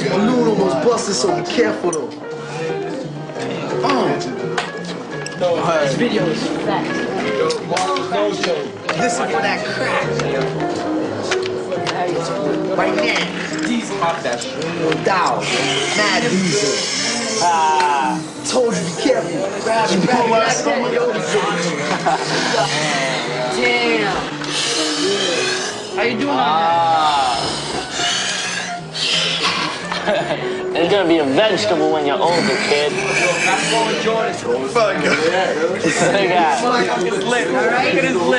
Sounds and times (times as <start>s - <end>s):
Music: 0.0s - 38.3s.